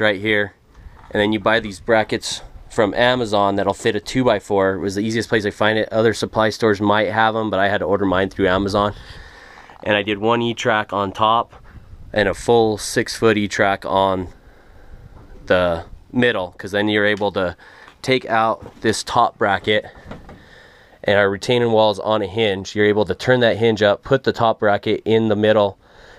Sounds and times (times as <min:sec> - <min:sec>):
Speech: 0:00.0 - 0:09.0, 0:09.8 - 0:14.4, 0:15.4 - 0:20.0, 0:21.0 - 0:25.8.